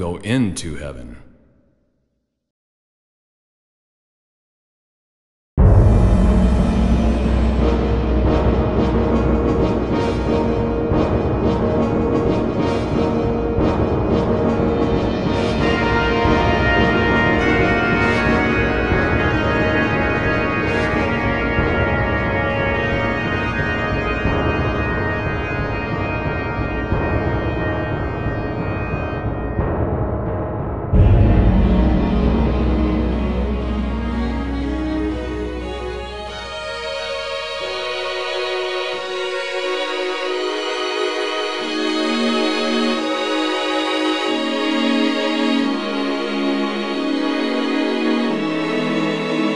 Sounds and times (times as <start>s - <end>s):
Music: 5.6s - 49.5s.